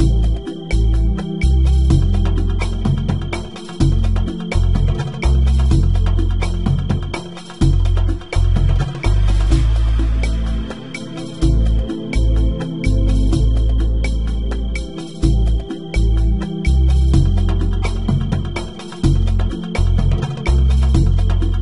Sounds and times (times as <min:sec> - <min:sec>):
Music: 0:00.0 - 0:21.6.